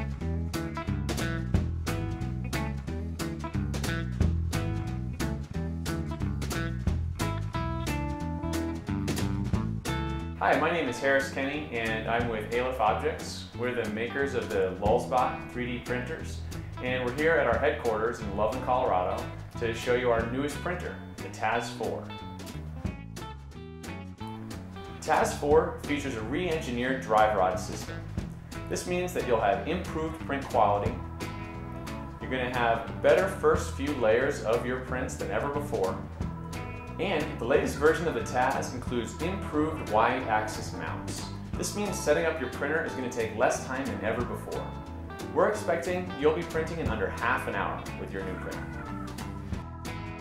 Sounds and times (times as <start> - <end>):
Music: 0.0 - 50.2
Speech: 10.4 - 22.2, 25.0 - 28.0, 28.7 - 31.0, 32.2 - 36.0, 37.0 - 44.8, 45.4 - 48.7.